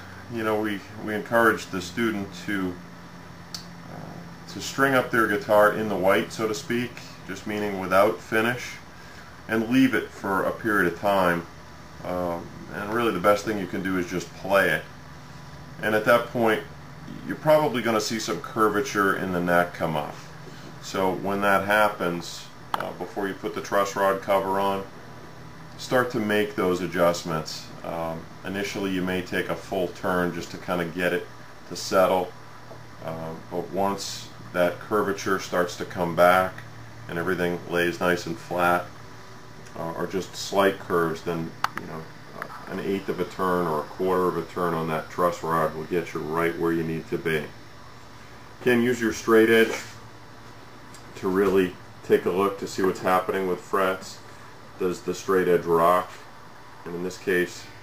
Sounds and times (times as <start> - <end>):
Speech: 0.3 - 2.9, 3.6 - 8.9, 9.5 - 15.0, 15.8 - 24.9, 25.8 - 32.4, 33.0 - 39.0, 39.7 - 47.6, 48.6 - 50.0, 51.0 - 57.8.